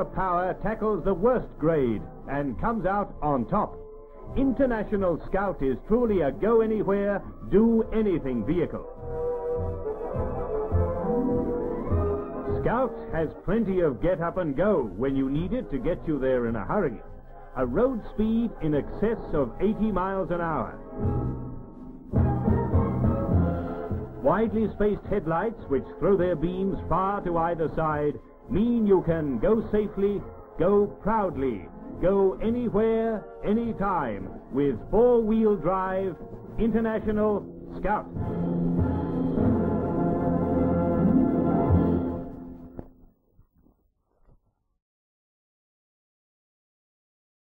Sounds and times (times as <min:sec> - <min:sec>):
Speech: 0:00.0 - 0:03.8, 0:04.4 - 0:08.9, 0:12.5 - 0:20.8, 0:24.2 - 0:38.1
Music: 0:00.0 - 0:43.7.